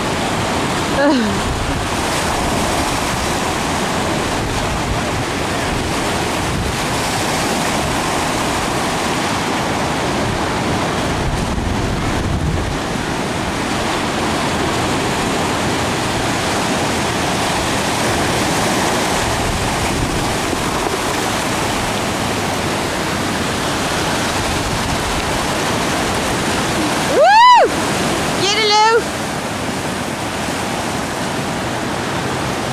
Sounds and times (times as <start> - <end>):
Waves, surf: 0.0 - 32.7.